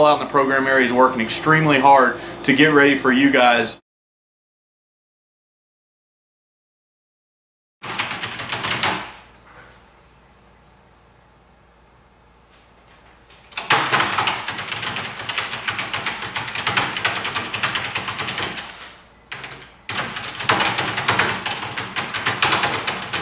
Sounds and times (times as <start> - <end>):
Typewriter: 7.8 - 9.2, 13.5 - 23.2.